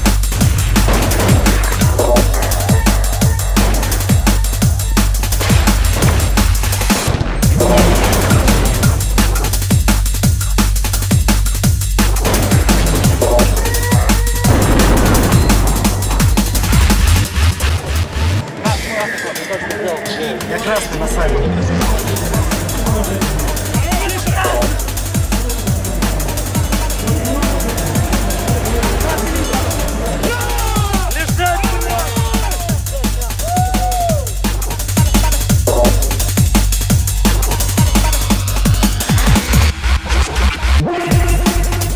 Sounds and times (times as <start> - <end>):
Drum and bass: 0.0 - 41.9.